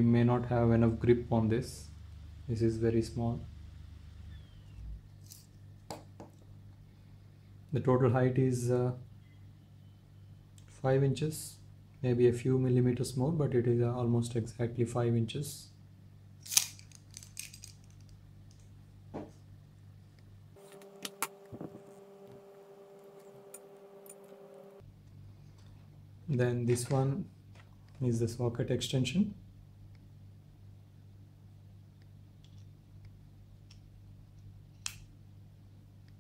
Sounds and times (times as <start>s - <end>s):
Speech: 0.0s - 3.5s, 7.7s - 9.1s, 10.7s - 15.8s, 26.3s - 27.3s, 28.0s - 29.4s
Inside, small room: 0.0s - 36.2s.